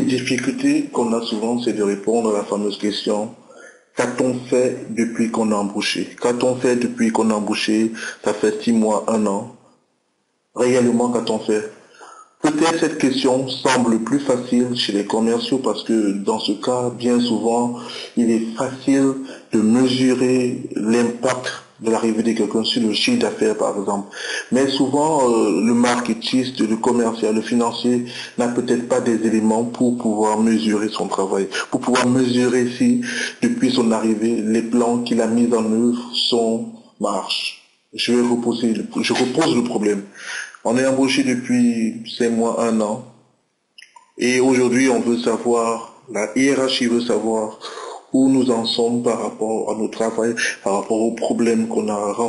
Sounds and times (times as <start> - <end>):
Speech: 0.0 - 9.7, 10.6 - 43.2, 43.8 - 52.2.